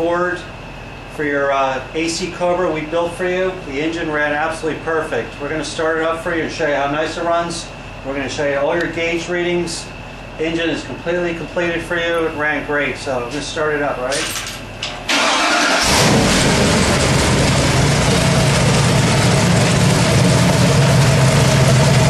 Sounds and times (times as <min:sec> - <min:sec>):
Speech: 0:00.0 - 0:00.5, 0:01.2 - 0:14.4
Engine: 0:00.0 - 0:22.0.